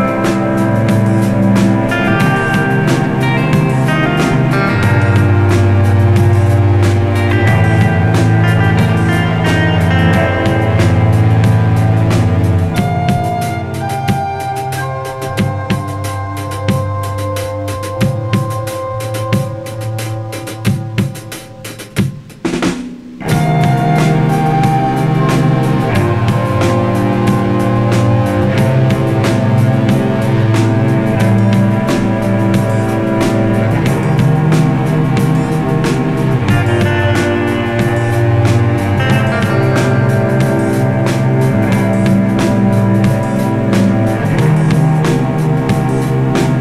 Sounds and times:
Bowed string instrument: 0.0 - 21.2, 23.2 - 46.6
Guitar: 0.0 - 22.3, 23.0 - 46.6
Snare drum: 20.4 - 46.6.

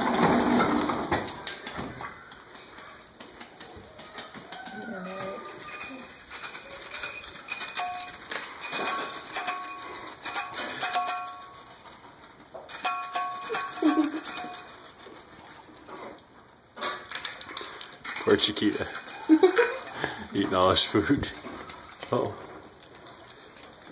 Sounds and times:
Speech: 20.3 - 21.4.

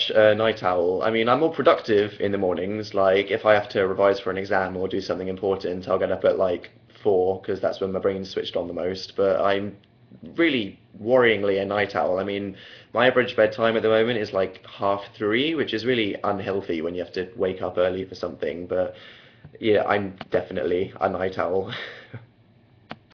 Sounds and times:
Speech: 0.0 - 19.0, 19.6 - 21.8.

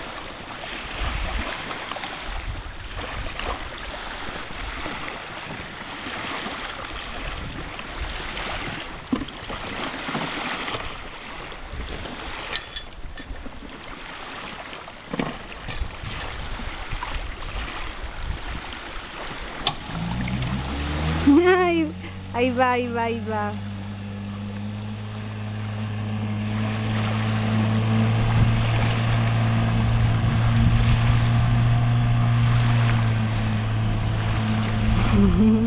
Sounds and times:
Motorboat, speedboat: 0.0 - 35.6
Speech: 21.4 - 23.6.

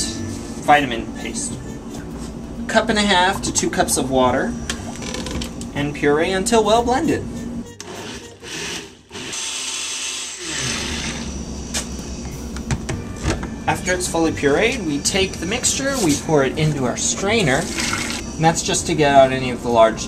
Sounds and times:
Blender: 7.8 - 11.9, 17.6 - 18.2.

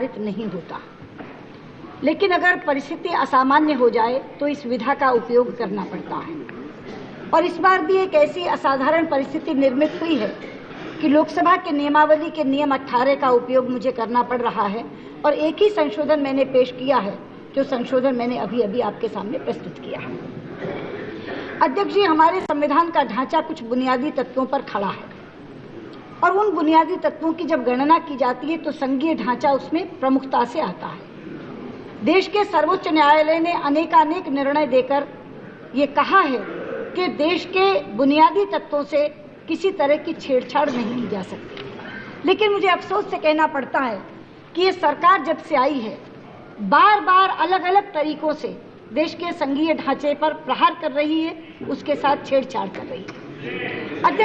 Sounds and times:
Female speech, woman speaking: 0.0 - 0.9, 2.0 - 6.5, 7.3 - 20.2, 21.6 - 25.2, 26.2 - 31.0, 32.0 - 35.1, 35.7 - 41.4, 42.2 - 53.1, 54.0 - 54.2.

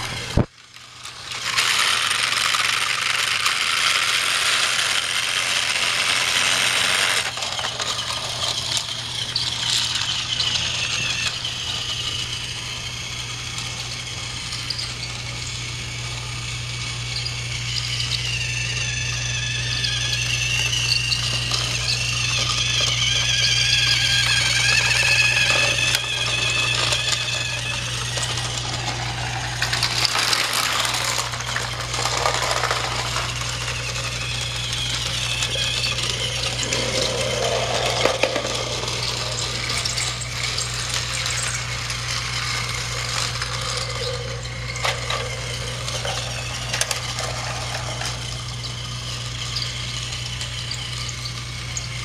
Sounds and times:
Train: 0.0 - 16.9, 21.3 - 51.5
Inside, small room: 0.0 - 52.0.

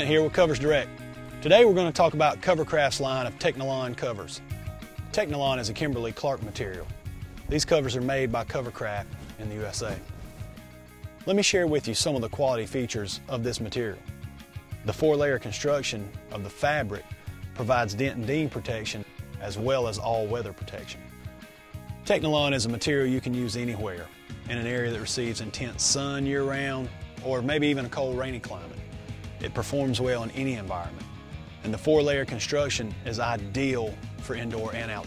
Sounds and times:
Speech: 0.0 - 4.4, 5.1 - 10.1, 11.2 - 14.1, 14.8 - 21.1, 22.0 - 28.8, 29.4 - 35.0
Music: 0.0 - 35.0.

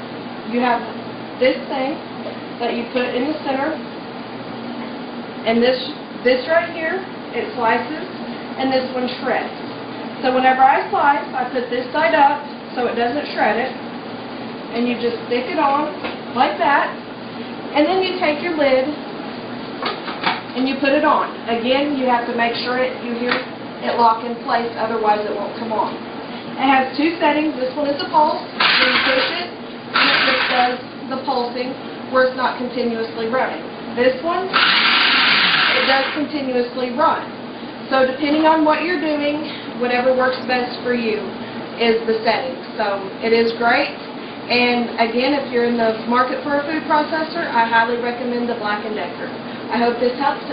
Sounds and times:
Speech: 0.5 - 2.0, 2.6 - 3.8, 5.5 - 9.6, 10.2 - 13.8, 14.7 - 17.0, 17.7 - 19.0, 20.6 - 26.0, 26.6 - 34.5, 35.7 - 37.3, 37.9 - 50.5.

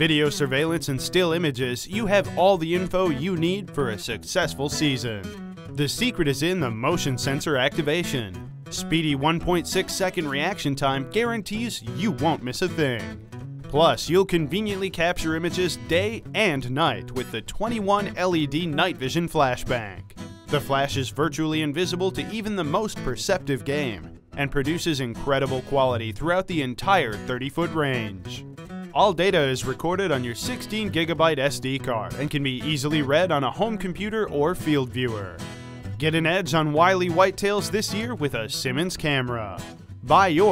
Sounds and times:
Speech: 0.0 - 13.1, 13.7 - 28.4, 29.0 - 35.4, 36.0 - 40.5
Music: 0.0 - 40.5.

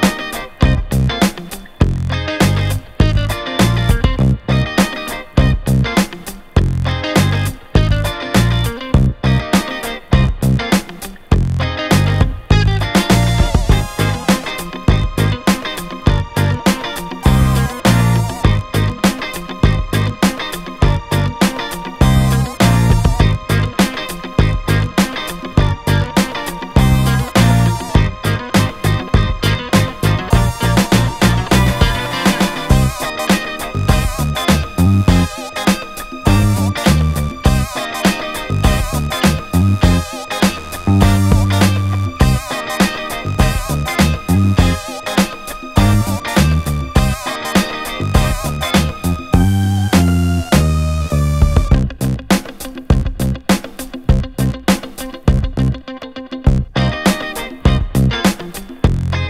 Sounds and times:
Music: 0.0 - 59.3.

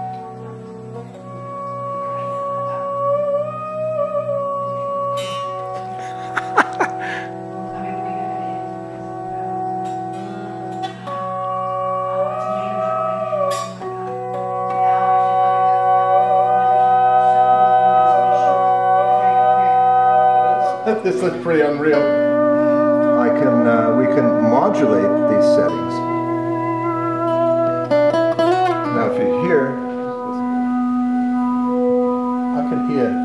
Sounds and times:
Music: 0.0 - 33.2
Speech: 20.8 - 22.1, 23.2 - 26.0, 28.9 - 29.8, 32.6 - 33.2.

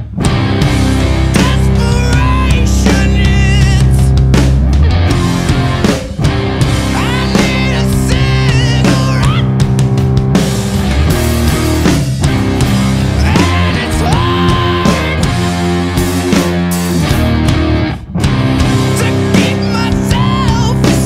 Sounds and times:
Heavy metal: 0.0 - 21.0
Singing: 7.0 - 9.5, 13.2 - 15.3.

